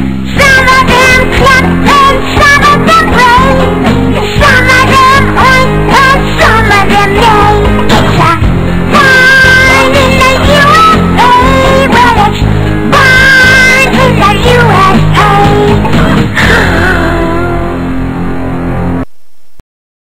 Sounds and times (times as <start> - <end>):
Music: 0.0 - 19.1.